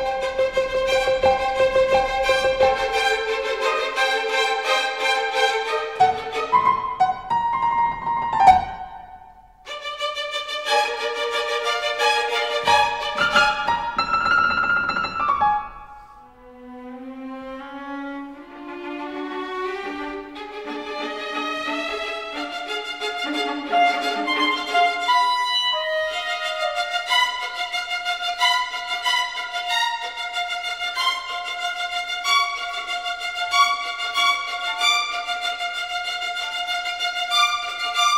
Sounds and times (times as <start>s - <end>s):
Music: 0.0s - 38.1s.